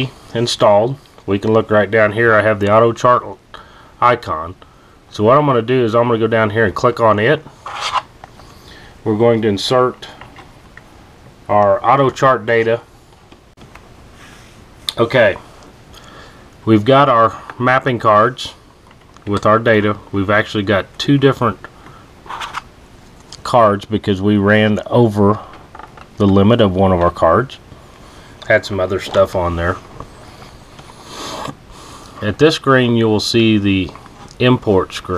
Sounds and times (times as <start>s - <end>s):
Speech: 0.0s - 7.5s, 9.0s - 10.2s, 11.5s - 12.9s, 14.9s - 15.5s, 16.6s - 18.6s, 19.2s - 21.7s, 23.4s - 25.5s, 26.2s - 27.6s, 28.4s - 29.9s, 32.2s - 35.1s
Inside, small room: 0.0s - 35.1s.